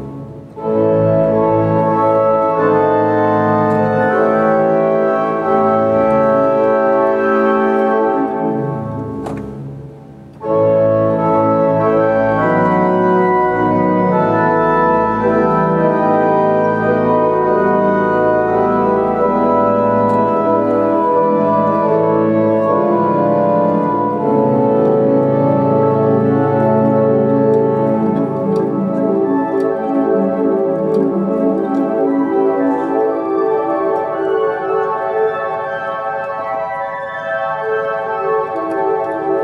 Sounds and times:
Piano: 0:00.0 - 0:39.4.

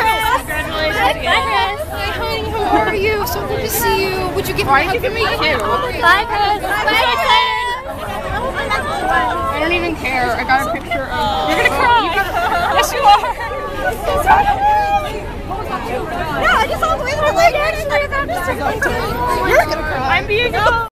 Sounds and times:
Speech: 0:00.0 - 0:20.9.

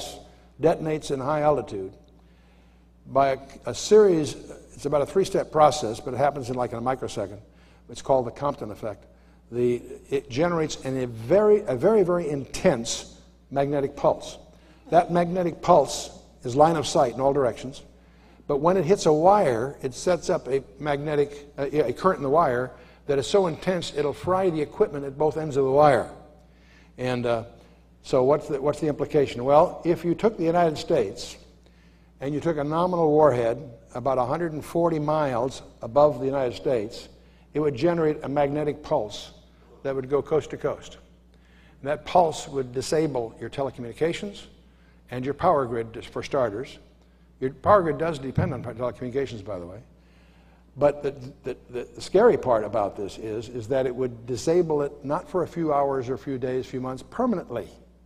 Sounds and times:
Speech: 0:00.0 - 0:02.0, 0:03.1 - 0:17.9, 0:18.5 - 0:26.2, 0:27.0 - 0:31.5, 0:32.2 - 0:41.0, 0:41.8 - 0:49.9, 0:50.8 - 0:57.9.

